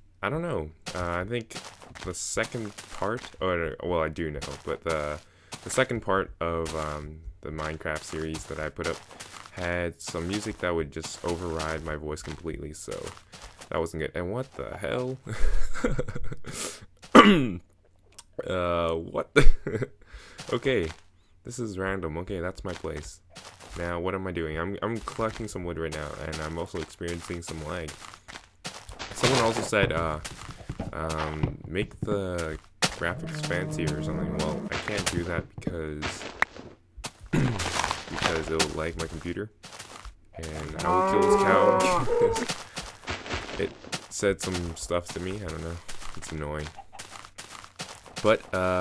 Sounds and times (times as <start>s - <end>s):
Speech: 0.2s - 15.3s, 18.2s - 28.0s, 29.1s - 30.3s, 30.9s - 36.2s, 37.5s - 39.5s, 40.4s - 42.5s, 43.6s - 46.7s, 48.2s - 48.8s.